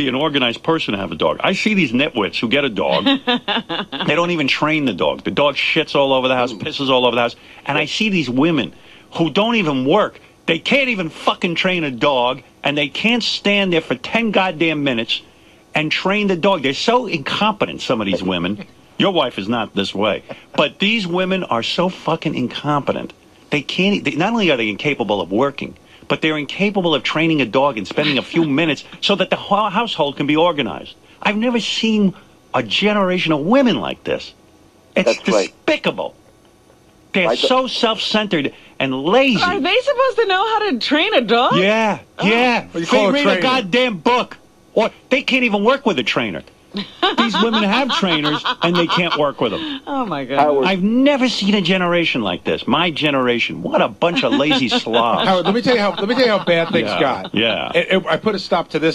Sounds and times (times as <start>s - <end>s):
Speech: 0.0s - 34.4s, 35.0s - 36.2s, 37.1s - 58.9s.